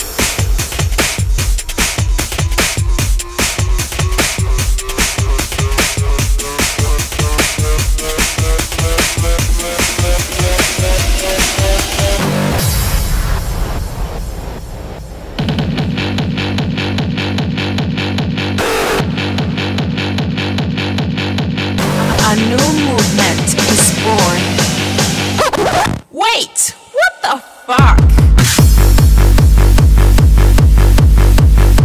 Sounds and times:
Electronic music: 0.1s - 12.7s, 15.5s - 31.8s.

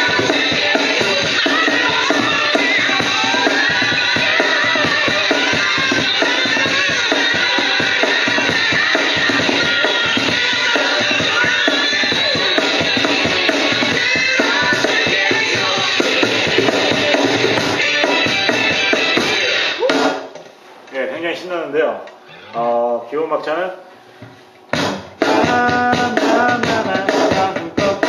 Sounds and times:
Speech: 20.9s - 23.8s.

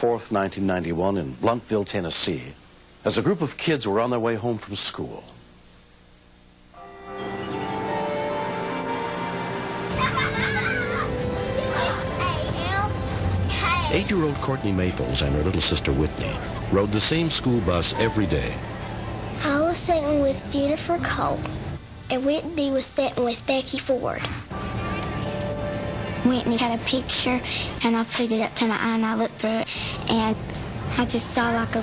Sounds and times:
Music: 6.8s - 21.8s, 24.5s - 31.8s.

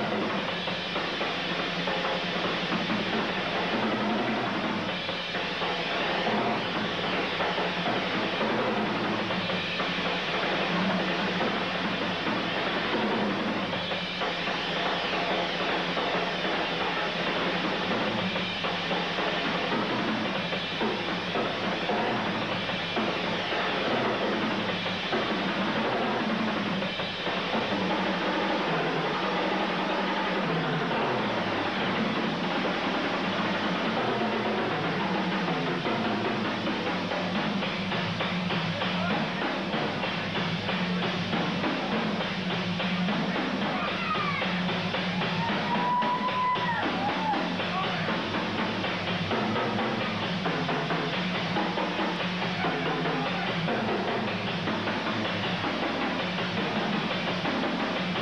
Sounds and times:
Bass drum: 0.0s - 58.2s
Drum kit: 0.0s - 58.2s.

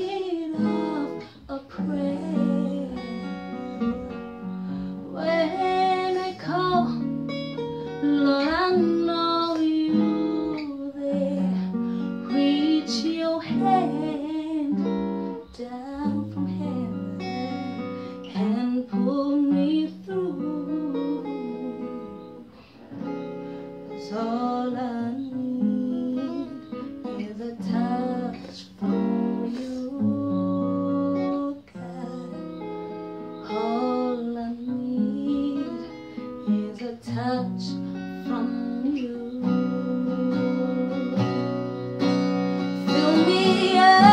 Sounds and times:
Acoustic guitar: 0.0s - 44.1s.

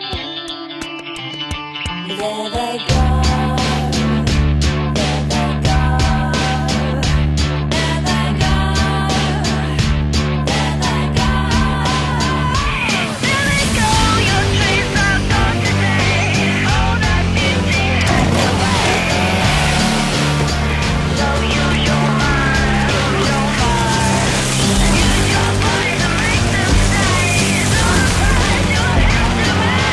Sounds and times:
Music: 0.0s - 29.9s.

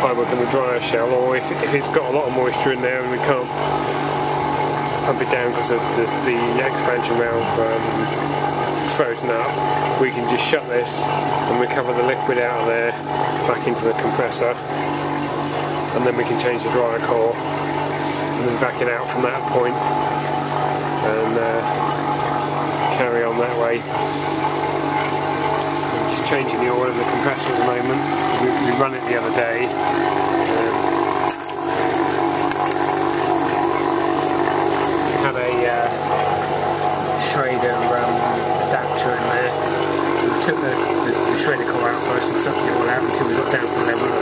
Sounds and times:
Speech: 0.0s - 3.6s, 5.1s - 8.1s, 8.8s - 14.6s, 15.9s - 17.4s, 18.4s - 19.8s, 21.0s - 21.7s, 22.8s - 23.9s, 26.0s - 29.8s, 30.4s - 30.8s, 35.2s - 36.0s, 37.2s - 39.6s, 40.3s - 44.2s.

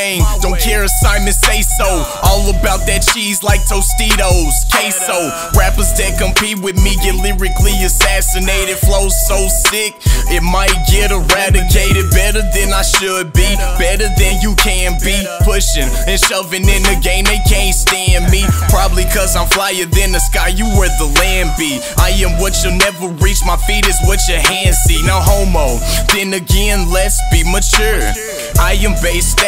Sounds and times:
Dance music: 0.0s - 29.4s
Independent music: 0.0s - 29.4s.

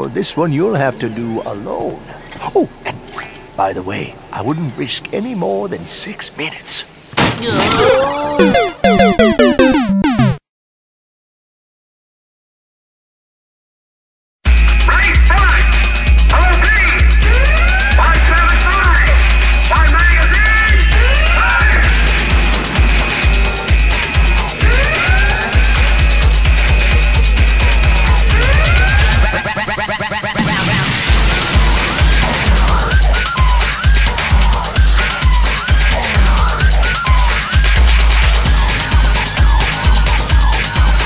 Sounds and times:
Speech: 0.0s - 8.4s, 14.9s - 17.1s, 18.0s - 21.8s
Music: 7.8s - 10.4s, 14.5s - 30.4s, 31.1s - 41.0s.

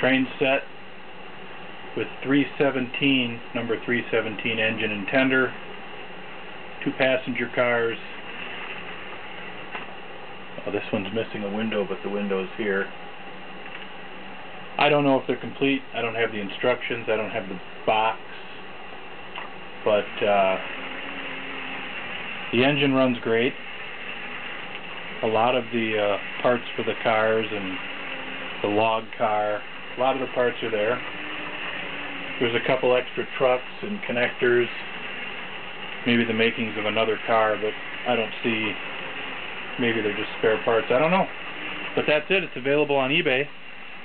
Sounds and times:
Speech: 0.0s - 0.7s, 2.0s - 5.6s, 6.8s - 8.2s, 10.6s - 12.9s, 14.8s - 18.6s, 19.8s - 20.6s, 22.5s - 23.6s, 25.2s - 27.8s, 28.6s - 31.0s, 32.4s - 34.9s, 36.0s - 38.8s, 39.8s - 41.3s, 42.0s - 43.5s.

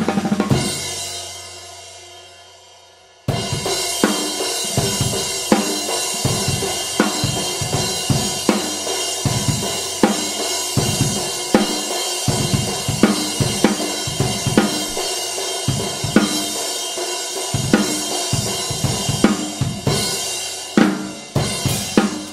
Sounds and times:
Bass drum: 6.3s - 11.7s, 12.3s - 15.1s.

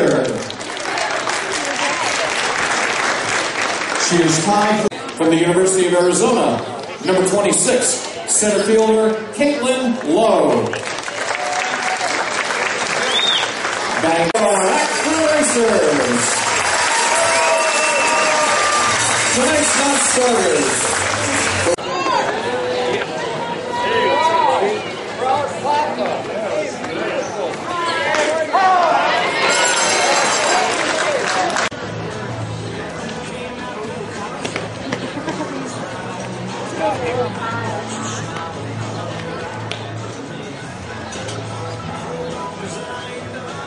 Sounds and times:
Crowd: 0.0s - 43.6s
Hubbub, speech noise, speech babble: 0.0s - 43.6s
Music: 14.6s - 21.8s, 31.7s - 43.6s.

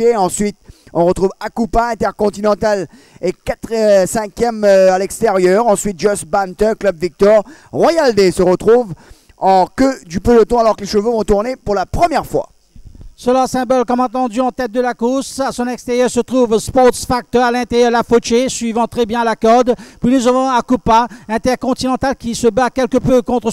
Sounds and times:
Speech: 0.0s - 12.5s, 13.2s - 23.5s.

